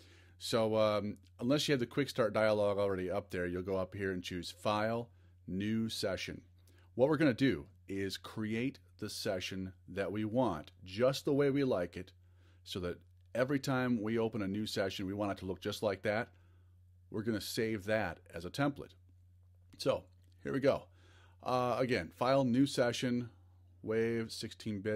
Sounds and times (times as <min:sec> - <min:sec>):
Speech: 0:00.4 - 0:12.1, 0:12.7 - 0:16.3, 0:17.1 - 0:19.0, 0:19.8 - 0:24.9.